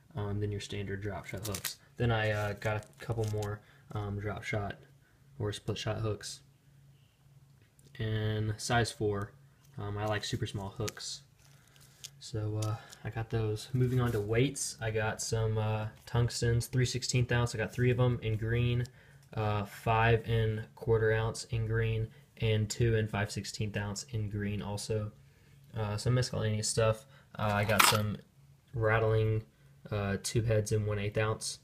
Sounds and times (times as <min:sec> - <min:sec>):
Speech: 0:00.0 - 0:06.5, 0:07.9 - 0:11.3, 0:12.2 - 0:31.6
Inside, small room: 0:00.0 - 0:31.6.